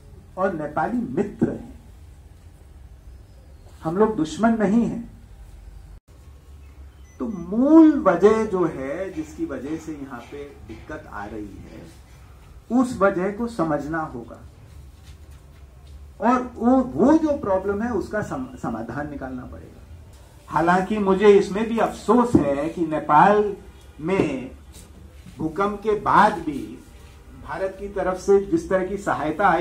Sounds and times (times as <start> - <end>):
Narration, monologue: 0.0 - 29.6
Male speech, man speaking: 0.4 - 1.8, 3.8 - 5.1, 7.2 - 12.0, 12.7 - 14.5, 16.2 - 19.8, 20.5 - 24.6, 25.4 - 29.6.